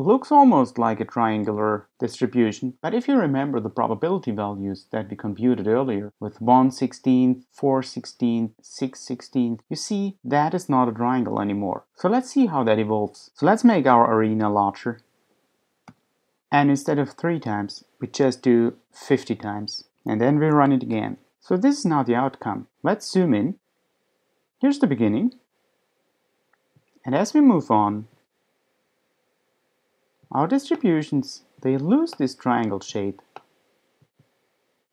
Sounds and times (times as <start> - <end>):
Speech: 0.0 - 15.0, 16.5 - 23.6, 24.6 - 25.5, 27.0 - 28.2, 30.3 - 33.4.